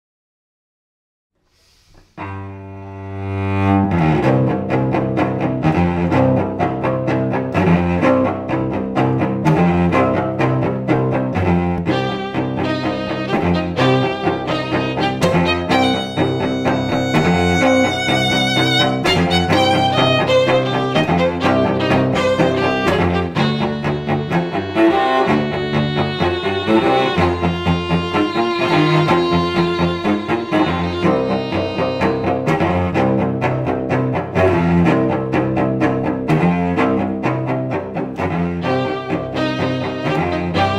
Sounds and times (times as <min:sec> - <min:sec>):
Cello: 0:01.8 - 0:40.7
Violin, fiddle: 0:02.2 - 0:40.7.